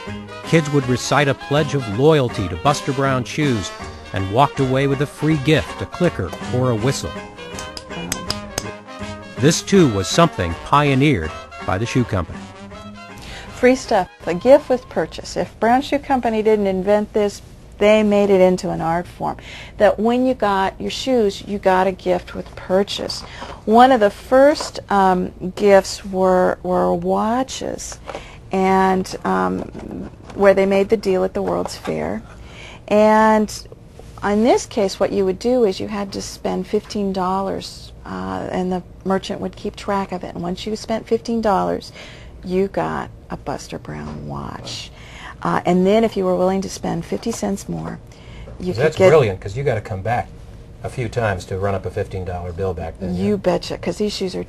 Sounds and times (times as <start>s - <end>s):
Inside, small room: 0.0s - 54.4s.